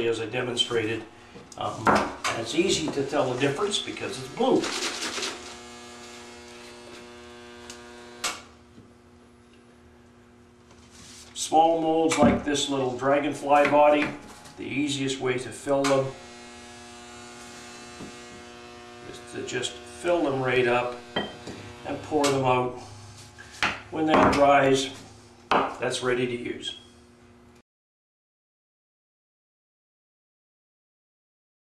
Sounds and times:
Speech: 0:00.0 - 0:04.7, 0:11.4 - 0:16.2, 0:19.1 - 0:21.0, 0:21.9 - 0:22.8, 0:23.9 - 0:25.0, 0:25.8 - 0:26.9.

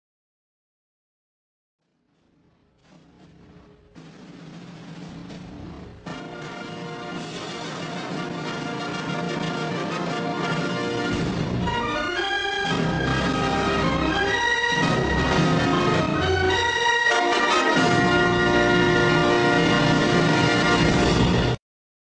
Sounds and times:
Music: 0:02.2 - 0:21.6.

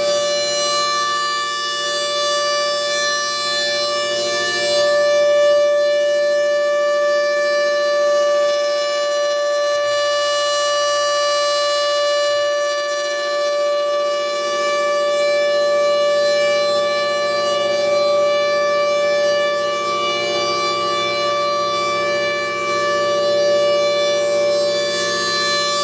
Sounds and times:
Civil defense siren: 0:00.0 - 0:25.8.

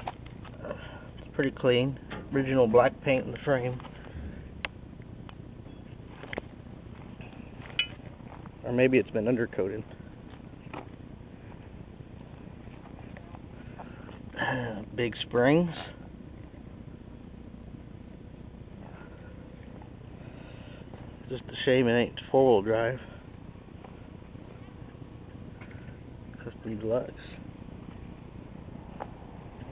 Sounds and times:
Vehicle: 0:00.0 - 0:29.7
Speech: 0:00.6 - 0:03.9, 0:08.6 - 0:09.9, 0:14.4 - 0:16.0, 0:21.3 - 0:23.1, 0:26.3 - 0:27.4.

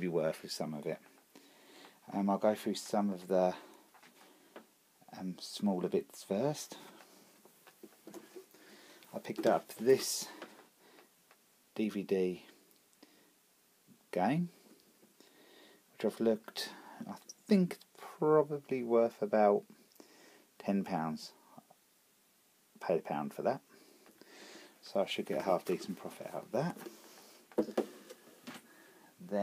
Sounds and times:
Speech: 0:00.0 - 0:01.1, 0:02.1 - 0:03.7, 0:05.1 - 0:06.9, 0:09.1 - 0:10.4, 0:11.8 - 0:12.6, 0:14.1 - 0:14.6, 0:16.0 - 0:19.7, 0:20.6 - 0:21.4, 0:22.8 - 0:23.7, 0:24.8 - 0:26.8.

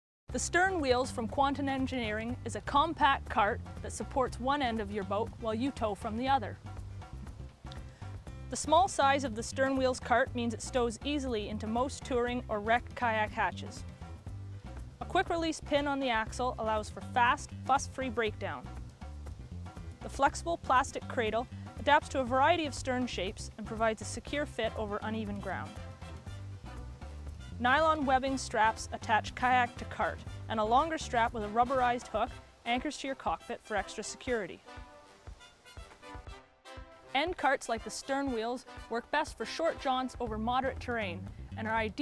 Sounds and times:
Speech: 0:00.3 - 0:06.6, 0:08.5 - 0:13.8, 0:15.0 - 0:18.7, 0:20.0 - 0:25.8, 0:27.6 - 0:34.6, 0:37.1 - 0:42.0
Music: 0:00.3 - 0:42.0.

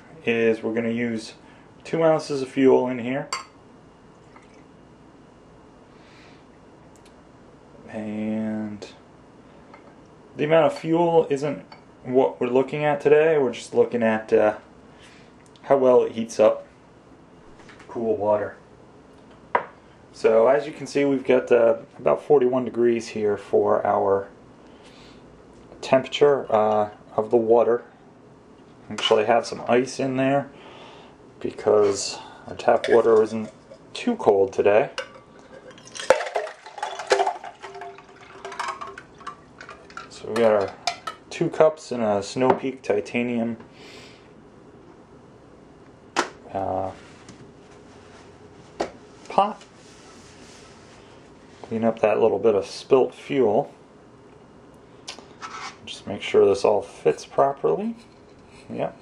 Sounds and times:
Speech: 0:00.1 - 0:03.4, 0:07.9 - 0:09.0, 0:10.4 - 0:14.7, 0:15.6 - 0:16.7, 0:17.9 - 0:18.6, 0:20.2 - 0:24.4, 0:25.8 - 0:27.9, 0:28.9 - 0:30.5, 0:31.4 - 0:35.0, 0:40.1 - 0:43.6, 0:46.5 - 0:47.0, 0:49.3 - 0:49.7, 0:51.7 - 0:53.8, 0:55.8 - 0:58.1, 0:58.7 - 0:59.0.

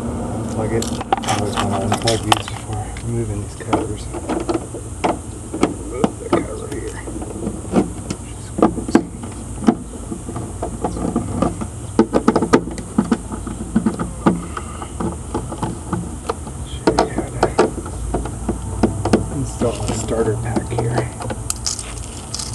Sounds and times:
Speech: 0:00.6 - 0:04.2, 0:05.8 - 0:07.1, 0:16.7 - 0:17.7, 0:19.3 - 0:21.2.

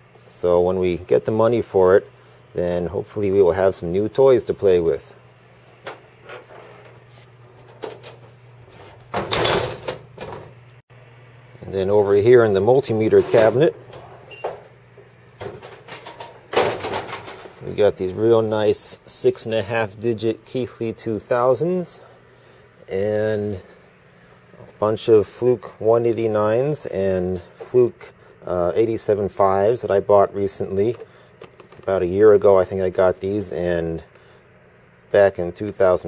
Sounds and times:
Speech: 0:00.3 - 0:05.2, 0:11.6 - 0:13.8, 0:17.6 - 0:22.1, 0:22.9 - 0:23.7, 0:24.8 - 0:31.0, 0:31.8 - 0:34.1, 0:35.1 - 0:36.0.

